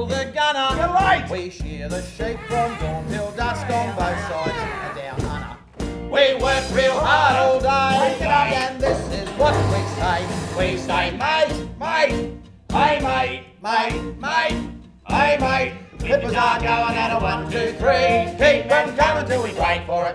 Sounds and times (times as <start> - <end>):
Music: 0.0 - 20.1.